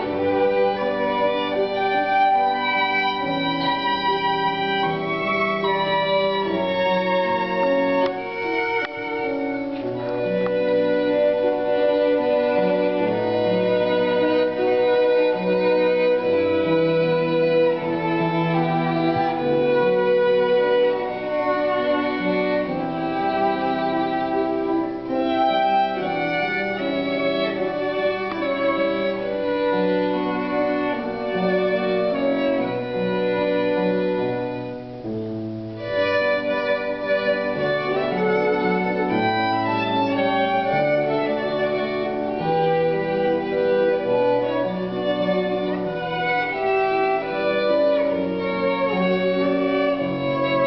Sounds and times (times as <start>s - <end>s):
Violin, fiddle: 0.0s - 50.6s.